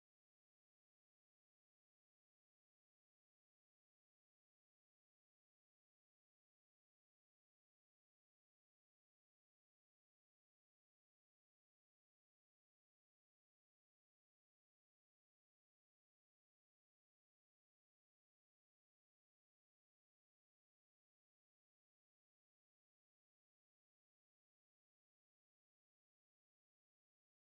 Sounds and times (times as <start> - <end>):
Silence: 0.0 - 27.5.